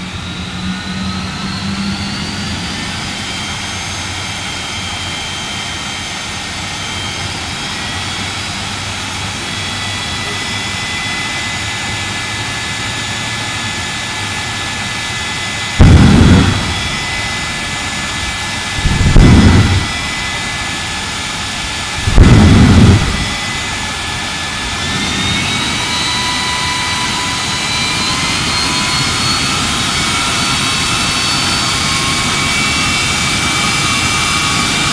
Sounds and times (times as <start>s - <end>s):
Vehicle: 0.0s - 34.9s.